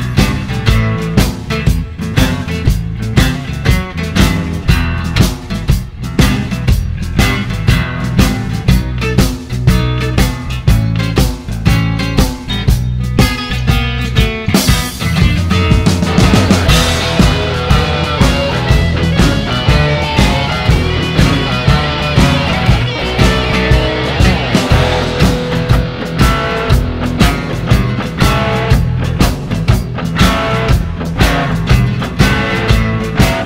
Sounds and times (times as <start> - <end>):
Blues: 0.0 - 33.4.